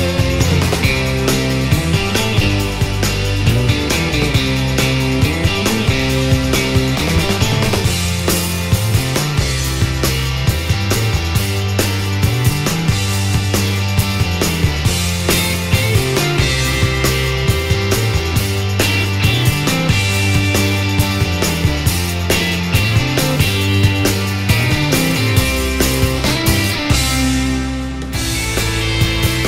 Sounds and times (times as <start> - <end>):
Music: 0.0 - 29.4.